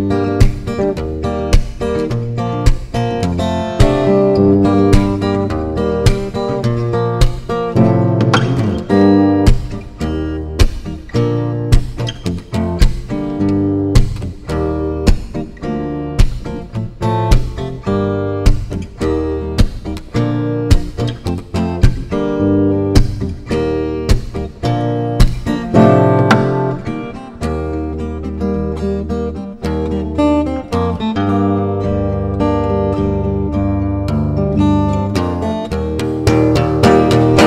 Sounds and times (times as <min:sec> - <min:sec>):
Acoustic guitar: 0:00.0 - 0:37.4.